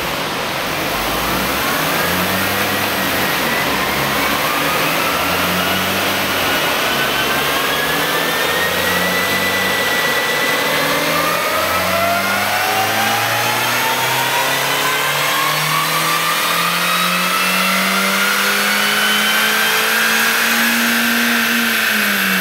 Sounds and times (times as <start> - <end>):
Car: 0.0 - 22.4
Medium engine (mid frequency): 0.0 - 22.4.